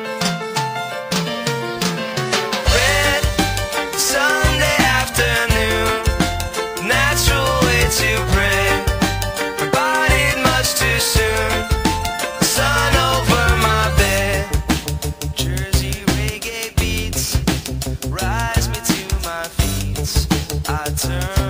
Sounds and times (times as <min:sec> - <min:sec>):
Music: 0:00.0 - 0:21.4.